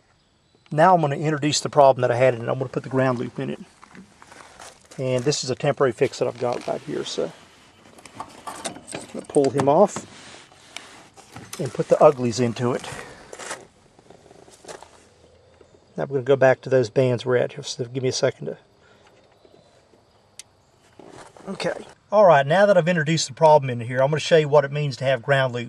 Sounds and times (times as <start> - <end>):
Speech: 0.7 - 3.7, 5.0 - 7.4, 9.1 - 10.0, 11.6 - 13.1, 16.0 - 18.6, 21.4 - 25.6.